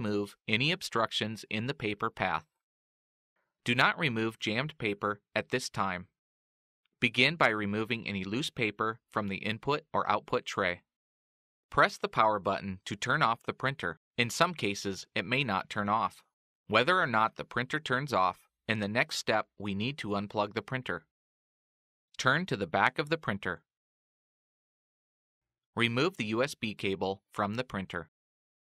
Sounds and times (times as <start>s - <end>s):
Speech: 0.0s - 2.5s, 3.6s - 6.2s, 7.0s - 10.9s, 11.7s - 21.1s, 22.2s - 23.7s, 25.8s - 28.1s.